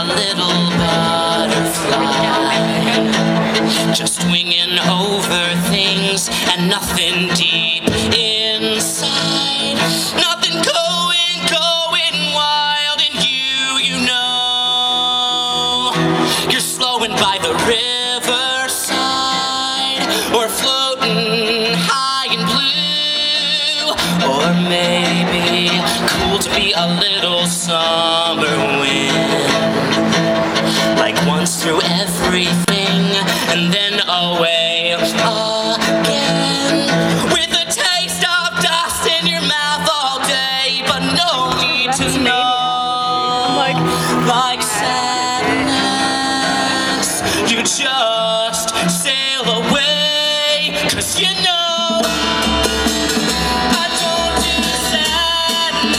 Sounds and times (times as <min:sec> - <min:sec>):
Music: 0:00.0 - 0:55.9.